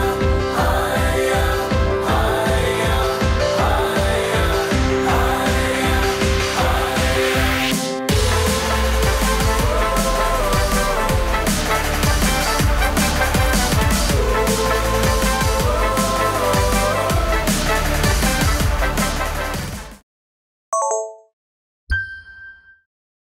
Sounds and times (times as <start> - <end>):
Music: 0.0 - 20.0.